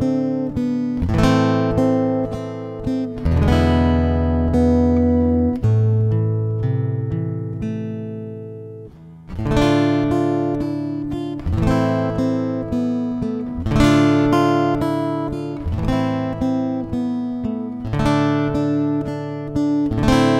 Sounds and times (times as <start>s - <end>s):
Strum: 0.0s - 20.3s.